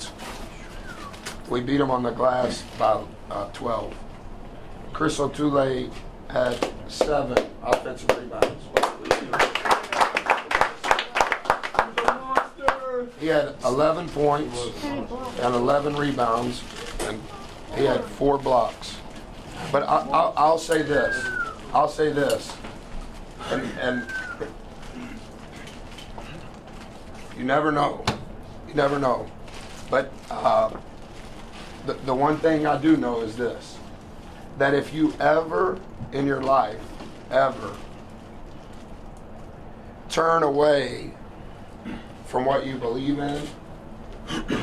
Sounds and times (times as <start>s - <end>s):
Speech: 10.9s - 19.0s, 19.7s - 22.6s, 28.7s - 29.3s, 29.9s - 30.8s, 31.8s - 33.8s, 34.6s - 37.8s, 40.1s - 41.2s, 42.2s - 43.6s.